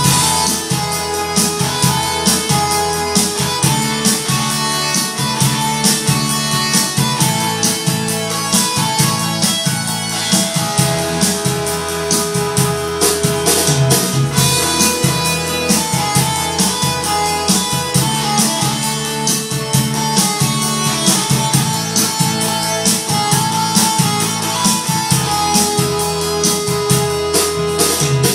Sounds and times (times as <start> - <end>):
Accordion: 0.0 - 28.3.